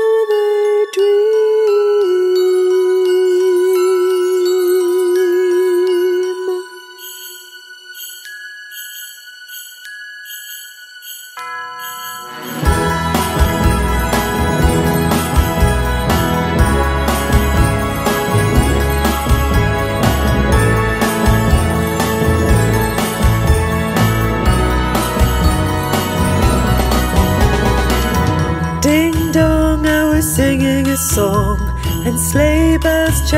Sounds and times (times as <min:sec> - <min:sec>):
Music: 0:00.0 - 0:33.3.